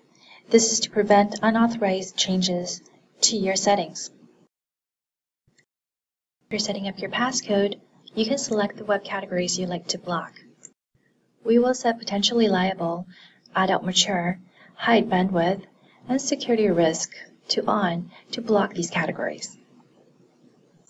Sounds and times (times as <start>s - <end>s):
Inside, small room: 0.0s - 4.6s, 6.4s - 20.9s
Speech: 0.5s - 4.2s, 6.5s - 10.4s, 11.4s - 19.6s.